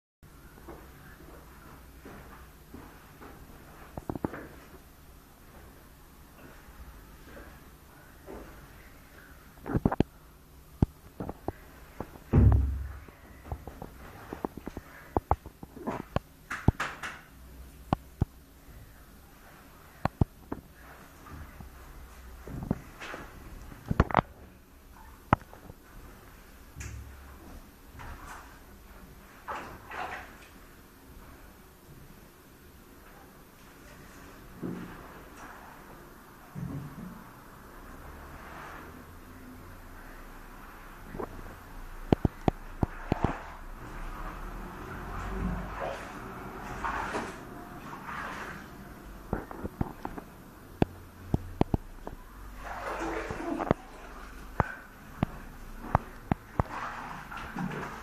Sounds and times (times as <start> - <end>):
Inside, small room: 0.2 - 58.0.